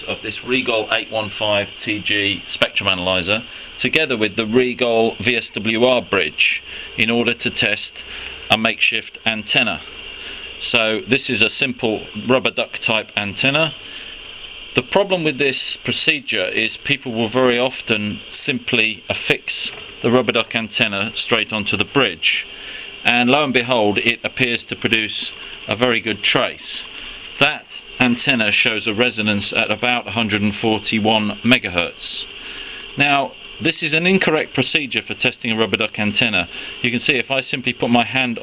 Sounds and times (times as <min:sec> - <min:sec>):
Speech: 0:00.0 - 0:09.9, 0:10.6 - 0:13.8, 0:14.8 - 0:32.3, 0:33.0 - 0:38.4.